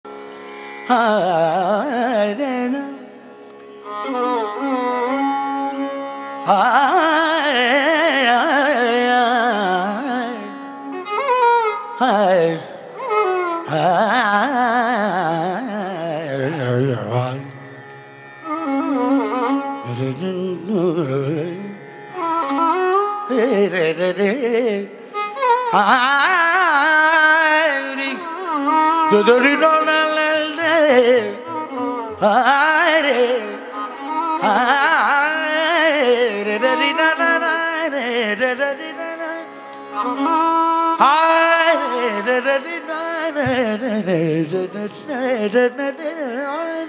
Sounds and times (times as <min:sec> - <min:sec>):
Carnatic music: 0:00.0 - 0:46.8
Sitar: 0:00.0 - 0:46.8.